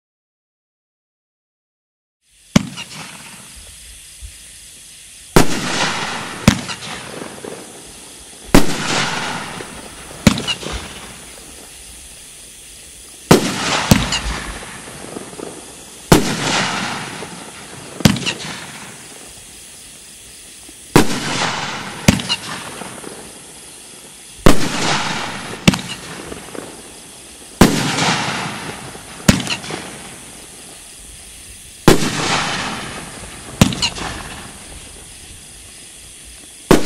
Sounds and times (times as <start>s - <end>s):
Firecracker: 2.2s - 36.8s.